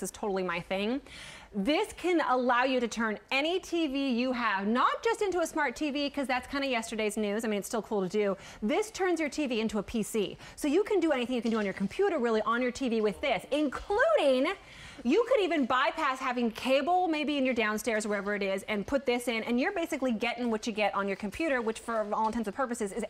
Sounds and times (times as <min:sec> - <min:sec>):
Speech: 0:01.6 - 0:23.0.